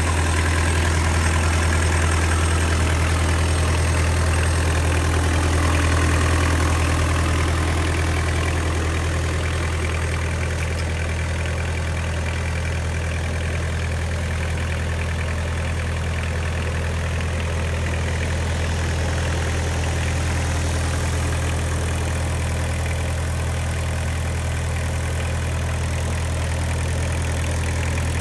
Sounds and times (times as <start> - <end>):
Idling: 0.0 - 28.2
Vehicle: 0.0 - 28.2.